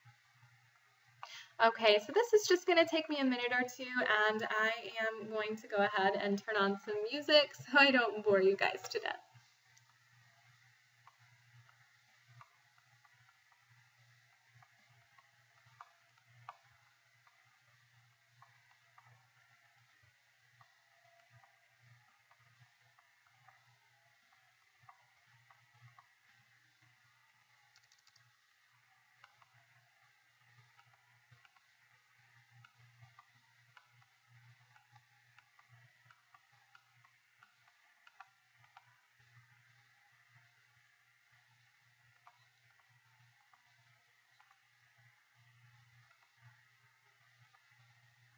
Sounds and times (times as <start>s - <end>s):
Speech: 1.6s - 9.2s.